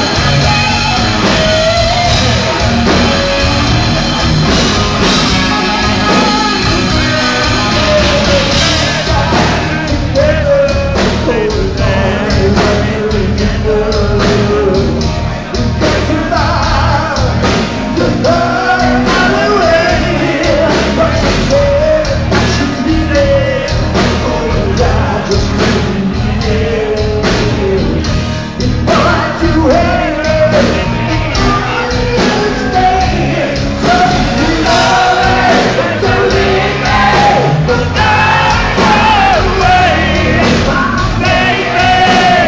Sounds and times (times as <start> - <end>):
Music: 0.0 - 42.4.